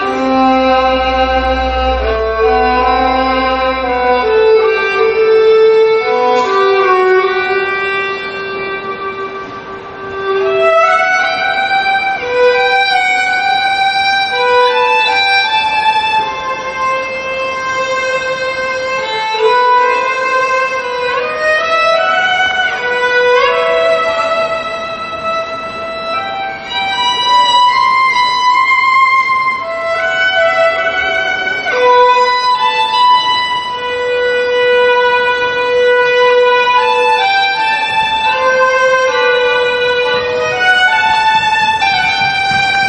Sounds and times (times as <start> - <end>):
Violin, fiddle: 0.0 - 42.8.